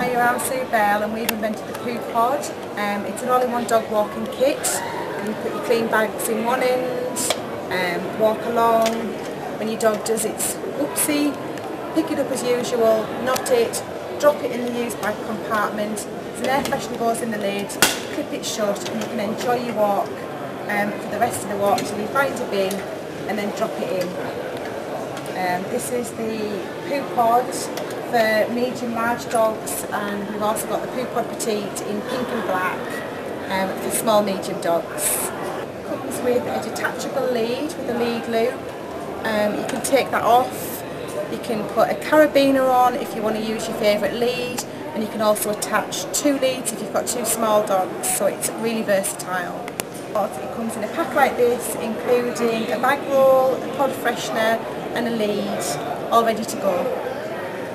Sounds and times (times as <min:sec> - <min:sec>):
Speech: 0:00.0 - 0:24.3, 0:25.4 - 0:57.3.